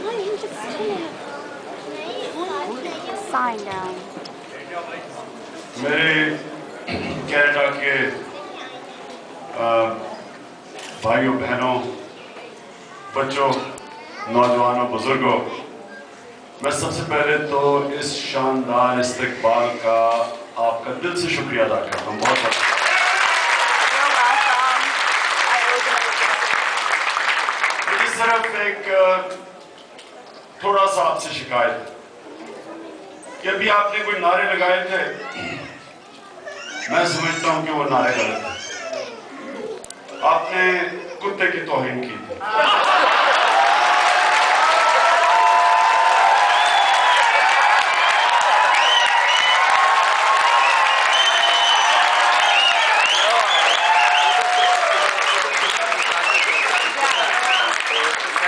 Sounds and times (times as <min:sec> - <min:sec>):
Male speech, man speaking: 0:05.8 - 0:06.5, 0:07.1 - 0:08.3, 0:09.6 - 0:10.1, 0:11.0 - 0:12.0, 0:13.2 - 0:15.7, 0:16.6 - 0:22.6, 0:27.9 - 0:29.4, 0:30.6 - 0:32.0, 0:33.4 - 0:35.3, 0:36.9 - 0:38.7, 0:40.2 - 0:42.4.